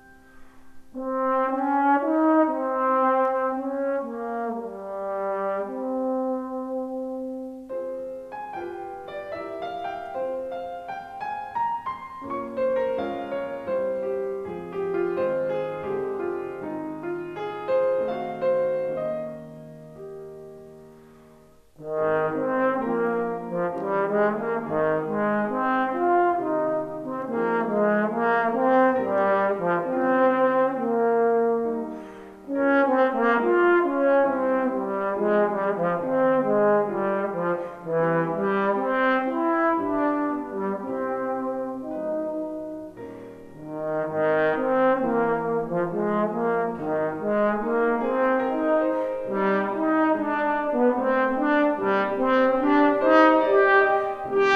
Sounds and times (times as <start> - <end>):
Music: 0.0 - 54.5.